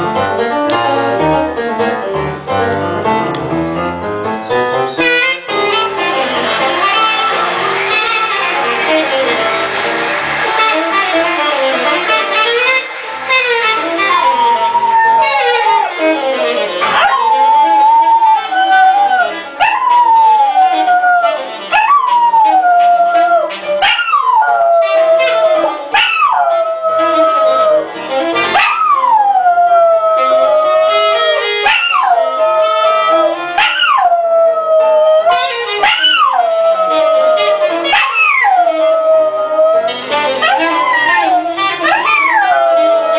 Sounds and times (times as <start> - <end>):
Music: 0.0 - 43.1
Bow-wow: 23.8 - 27.3, 28.6 - 29.1, 35.8 - 36.5, 37.9 - 38.8, 40.4 - 42.9.